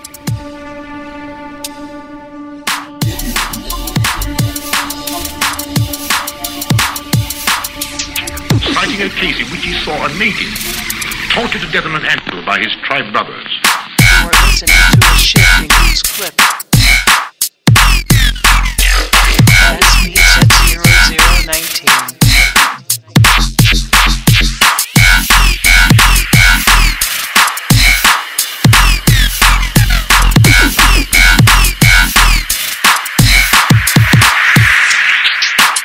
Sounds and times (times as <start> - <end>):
Drum and bass: 0.0 - 1.9, 2.6 - 35.8.